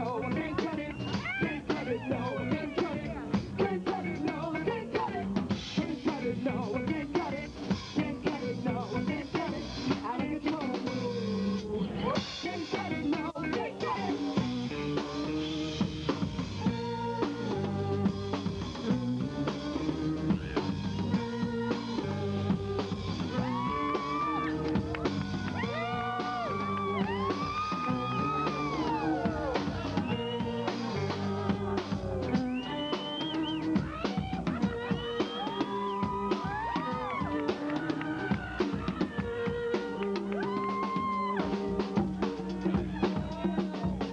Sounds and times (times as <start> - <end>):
Theme music: 20.4 - 40.6.